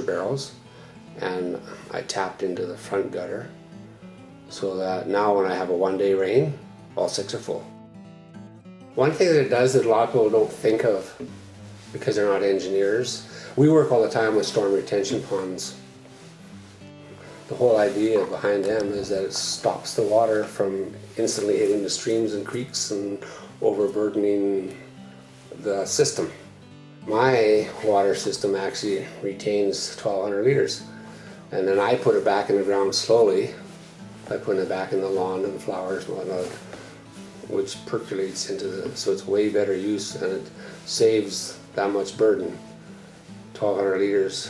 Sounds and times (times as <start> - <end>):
Speech: 0.0 - 0.6, 1.2 - 3.6, 4.5 - 7.7, 9.0 - 11.3, 11.9 - 15.8, 17.5 - 24.8, 25.5 - 30.9, 31.5 - 33.7, 34.3 - 36.7, 37.4 - 42.6, 43.5 - 44.4
Music: 0.0 - 44.4.